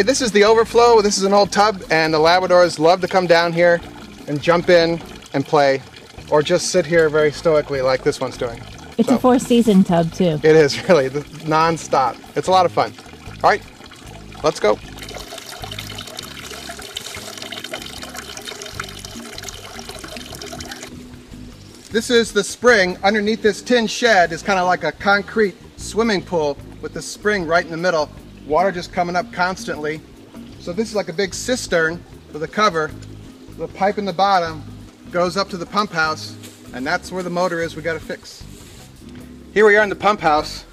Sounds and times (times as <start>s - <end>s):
Music: 0.0s - 40.7s.